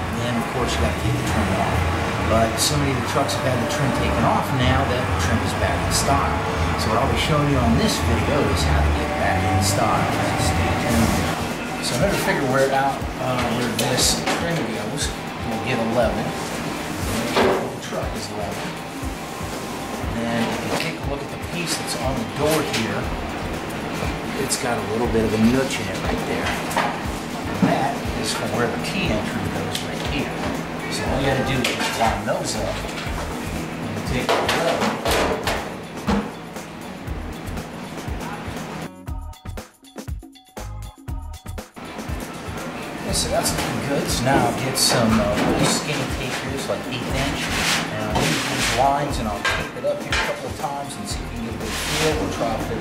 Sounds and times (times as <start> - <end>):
Speech: 0.0 - 16.4, 17.1 - 18.8, 20.1 - 23.1, 24.4 - 26.6, 27.6 - 33.0, 34.0 - 35.0, 43.0 - 52.8
Music: 0.0 - 52.8.